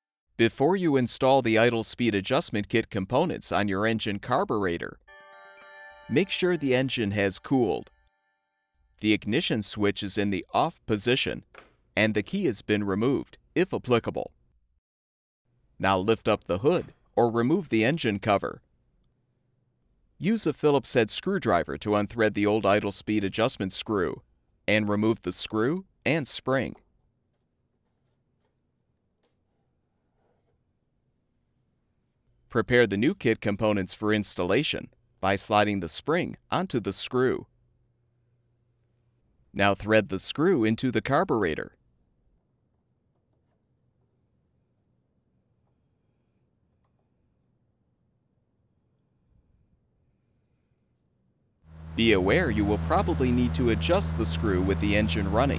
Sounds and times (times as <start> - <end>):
Speech: 0.4 - 5.0, 6.1 - 7.9, 9.0 - 11.4, 12.0 - 14.3, 15.8 - 18.6, 20.2 - 26.8, 32.5 - 37.5, 39.6 - 41.8, 52.0 - 55.5.